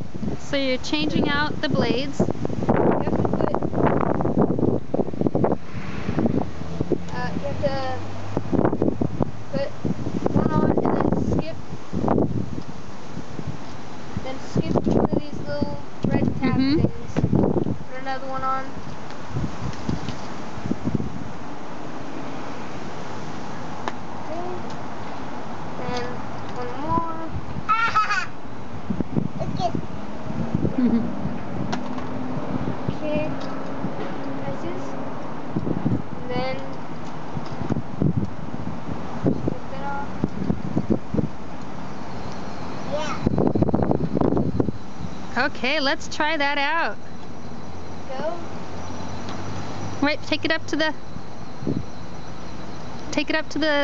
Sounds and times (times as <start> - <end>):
Rustling leaves: 1.5 - 45.4
Speech: 14.3 - 17.2.